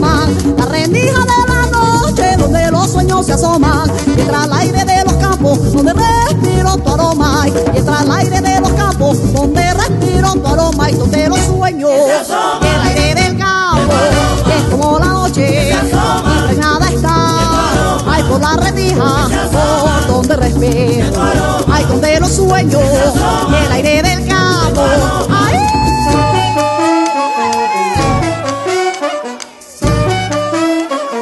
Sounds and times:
Music: 0.0s - 31.2s.

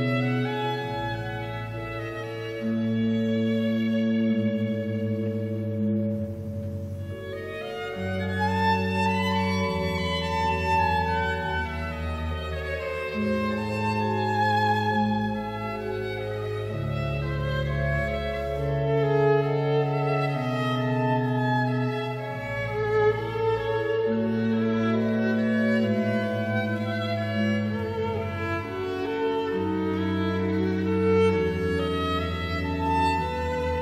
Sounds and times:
Violin, fiddle: 0.0s - 33.8s.

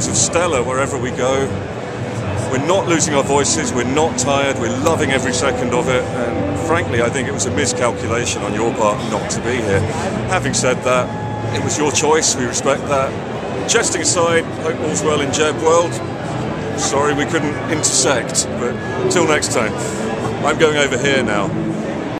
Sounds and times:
Speech: 0.0s - 1.6s, 2.4s - 16.0s, 16.8s - 21.5s.

